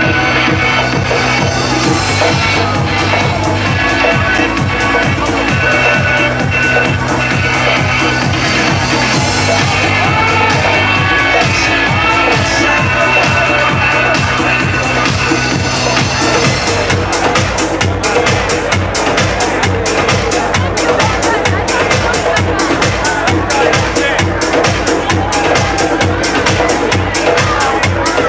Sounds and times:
Electronica: 0:00.0 - 0:28.2
Speech: 0:00.0 - 0:28.2.

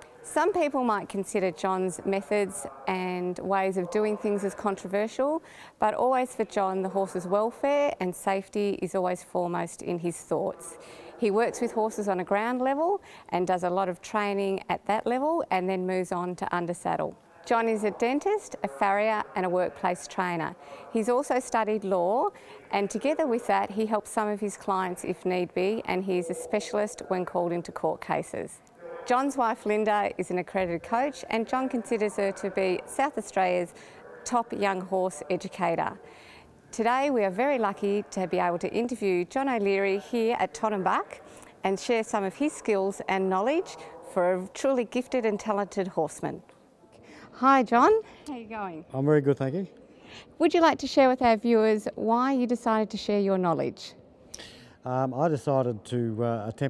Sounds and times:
Speech: 0:00.2 - 0:36.0, 0:36.8 - 0:46.4, 0:47.4 - 0:49.7, 0:54.9 - 0:56.6.

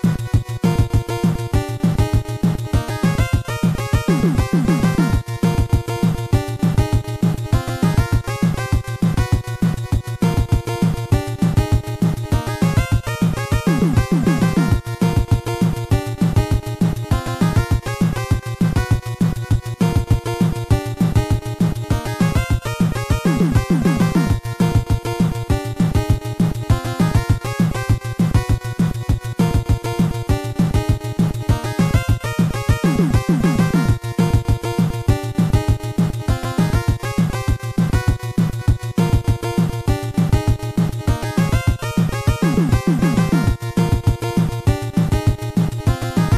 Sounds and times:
Video game music: 0:00.0 - 0:46.3.

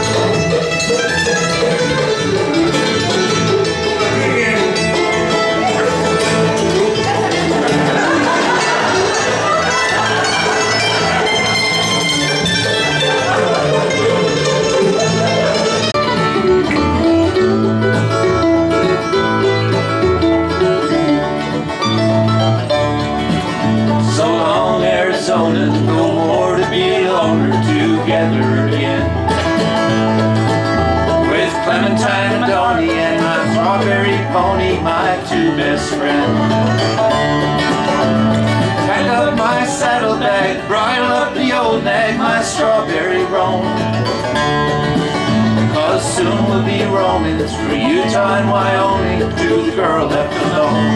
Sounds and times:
Bluegrass: 0:00.0 - 0:50.9.

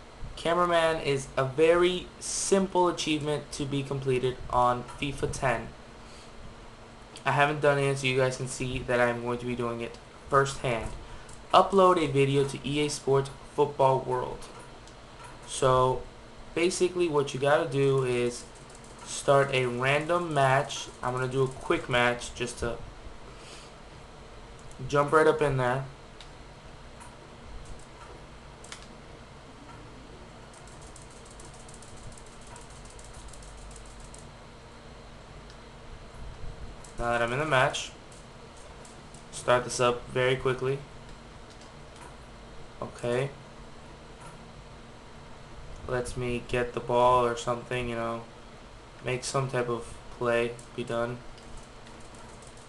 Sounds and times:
Speech: 0:00.4 - 0:05.8, 0:07.2 - 0:14.6, 0:15.5 - 0:18.5, 0:19.1 - 0:22.9, 0:24.8 - 0:26.0, 0:37.0 - 0:38.0, 0:39.3 - 0:40.9, 0:42.8 - 0:43.4, 0:45.9 - 0:48.3, 0:49.0 - 0:51.3.

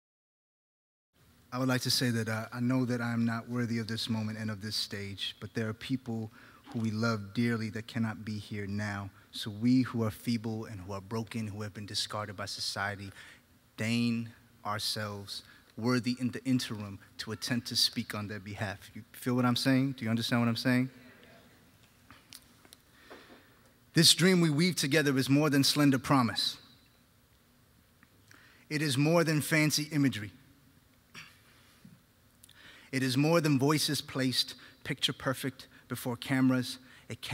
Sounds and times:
Speech: 0:01.5 - 0:13.2, 0:13.8 - 0:21.6, 0:24.0 - 0:26.7, 0:28.7 - 0:30.4, 0:32.9 - 0:37.3.

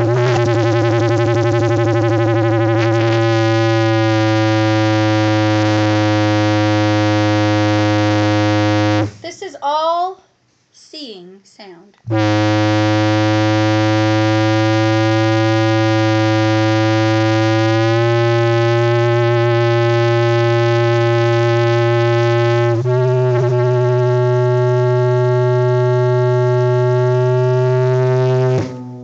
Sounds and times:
Music: 0:00.0 - 0:09.2, 0:13.2 - 0:29.0.

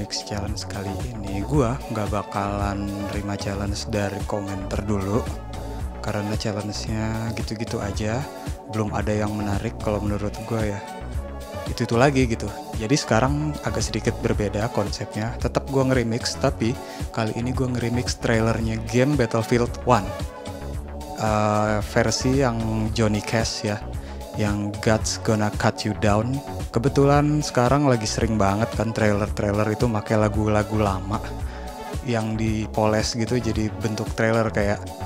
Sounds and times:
Speech: 0:00.0 - 0:05.4, 0:06.0 - 0:10.9, 0:11.7 - 0:20.2, 0:21.2 - 0:23.8, 0:24.4 - 0:31.4, 0:32.1 - 0:34.9.

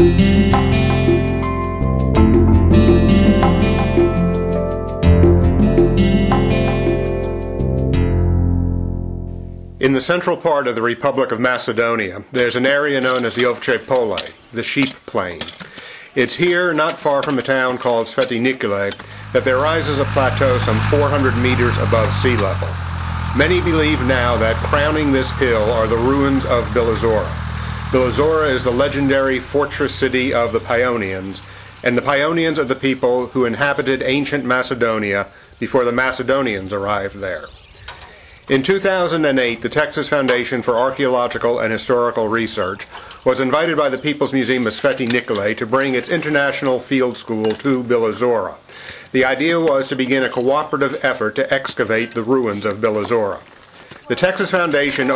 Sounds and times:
Music: 0:00.0 - 0:09.8
Speech: 0:09.8 - 0:15.5, 0:16.2 - 0:22.8, 0:23.4 - 0:37.5, 0:38.5 - 0:55.1.

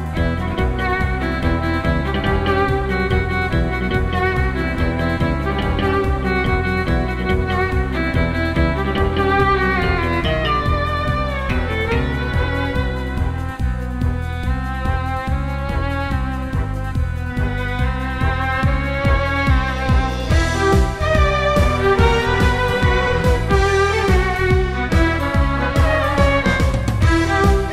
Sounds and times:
Violin, fiddle: 0:00.0 - 0:27.7.

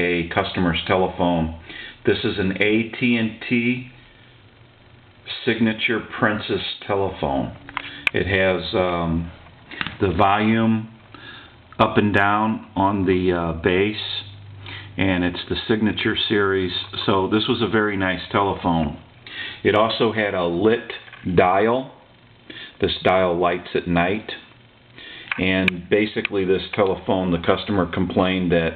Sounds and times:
Speech: 0:00.0 - 0:04.0, 0:05.3 - 0:11.0, 0:11.8 - 0:14.4, 0:15.0 - 0:22.1, 0:22.8 - 0:24.5, 0:25.4 - 0:28.7.

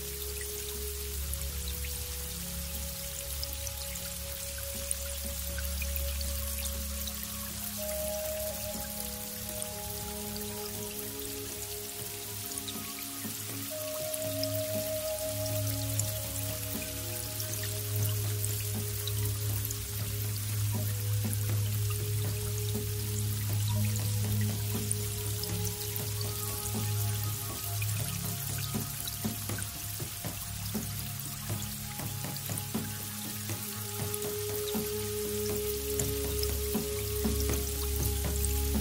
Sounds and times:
Music: 0:00.0 - 0:38.8.

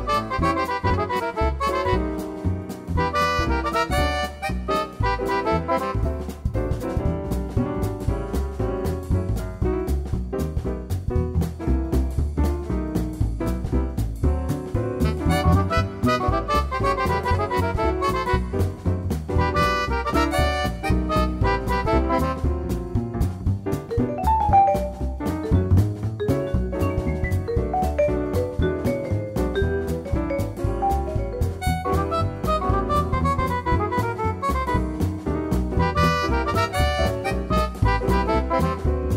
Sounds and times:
Music: 0:00.0 - 0:39.1.

